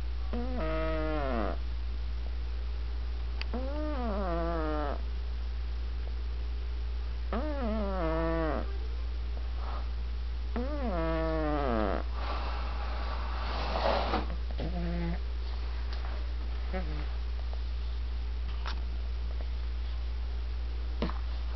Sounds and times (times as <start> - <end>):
Cat: 0.3 - 1.6, 3.5 - 5.0, 7.3 - 8.9, 10.6 - 12.0, 14.6 - 15.2
Snoring: 0.3 - 1.6, 3.5 - 5.0, 7.3 - 8.7, 10.6 - 12.5, 13.4 - 15.2, 16.7 - 17.1.